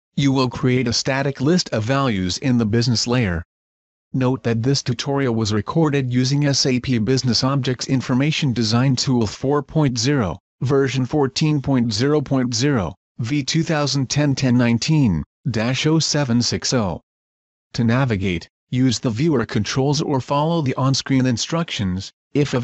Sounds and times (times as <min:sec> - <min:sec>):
Speech: 0:00.2 - 0:03.5, 0:04.2 - 0:17.1, 0:17.7 - 0:22.6.